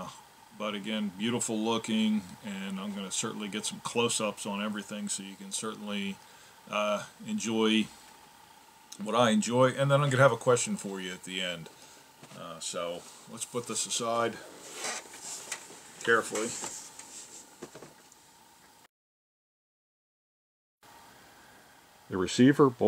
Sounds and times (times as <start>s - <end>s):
Speech: 0.0s - 7.9s, 9.0s - 11.7s, 12.3s - 14.4s, 16.0s - 16.7s, 22.1s - 22.8s.